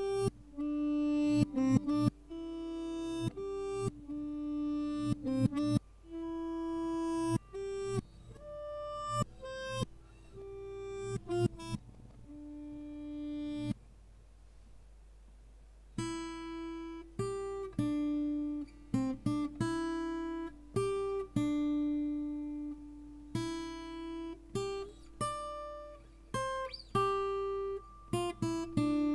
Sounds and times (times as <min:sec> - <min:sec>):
Music: 0:00.0 - 0:13.8, 0:16.0 - 0:29.1.